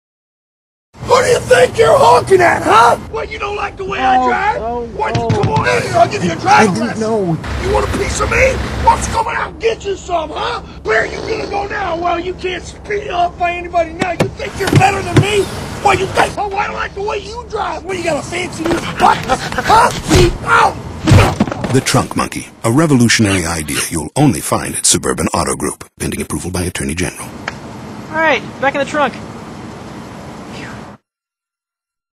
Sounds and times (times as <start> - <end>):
Speech: 1.1 - 20.3, 21.7 - 27.3.